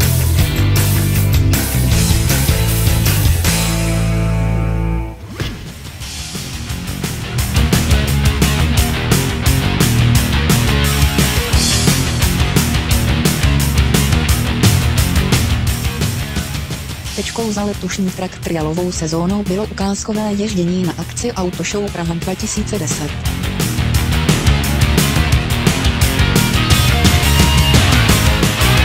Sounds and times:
Music: 0:00.0 - 0:28.8
Speech: 0:17.2 - 0:23.2.

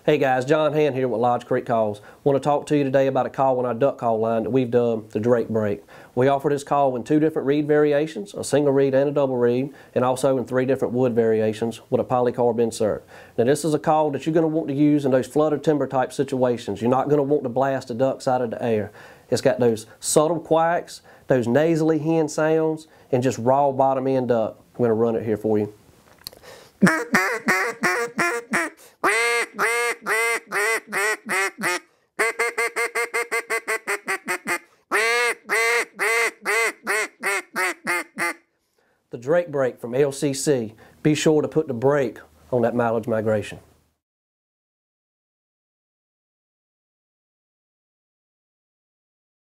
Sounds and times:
Quack: 0:26.8 - 0:38.4.

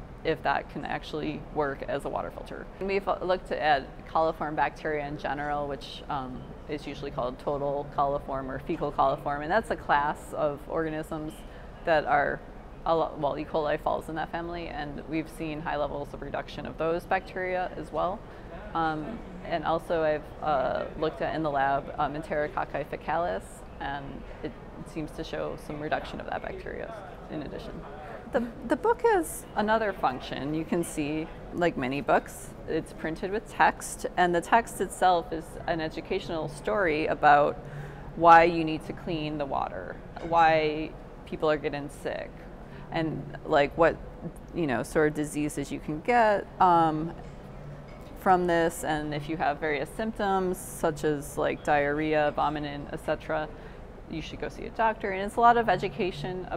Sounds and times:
Speech: 0:00.3 - 0:18.2, 0:18.8 - 0:24.2, 0:24.8 - 0:37.6, 0:38.2 - 0:47.1, 0:48.2 - 0:53.5, 0:54.1 - 0:56.5.

